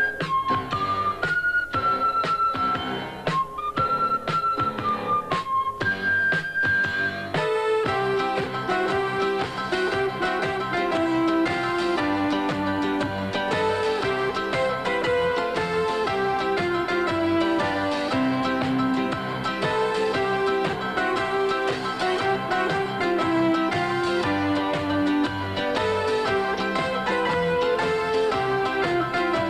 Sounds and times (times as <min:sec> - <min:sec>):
Music: 0:00.0 - 0:29.5.